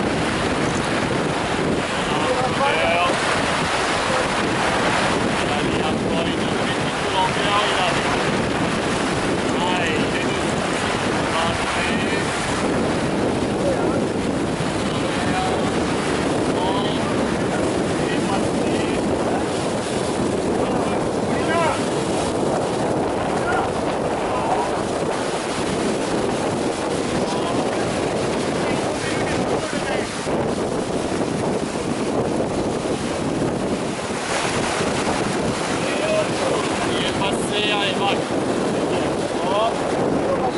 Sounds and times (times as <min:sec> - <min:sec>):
Sailboat, sailing ship: 0:00.0 - 0:40.5
Speech: 0:02.0 - 0:03.2, 0:05.5 - 0:08.3, 0:09.5 - 0:10.6, 0:11.3 - 0:12.3, 0:14.9 - 0:15.6, 0:16.6 - 0:19.4, 0:20.6 - 0:21.9, 0:23.4 - 0:24.8, 0:27.2 - 0:28.0, 0:28.6 - 0:30.2, 0:35.8 - 0:40.5.